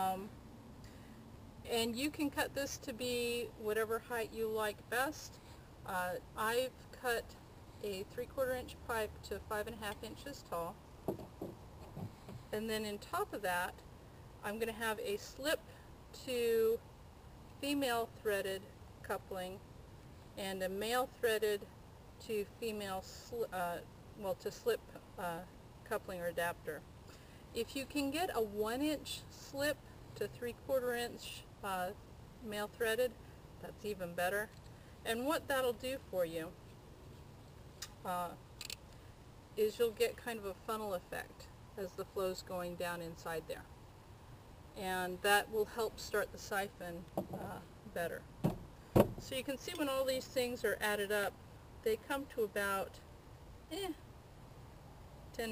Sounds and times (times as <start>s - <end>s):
Speech: 0.0s - 0.3s, 1.7s - 10.8s, 12.6s - 13.8s, 14.4s - 16.8s, 17.6s - 19.6s, 20.4s - 26.8s, 27.6s - 34.5s, 35.1s - 36.6s, 38.0s - 38.4s, 39.6s - 43.7s, 44.8s - 48.2s, 49.2s - 53.0s, 53.7s - 54.0s.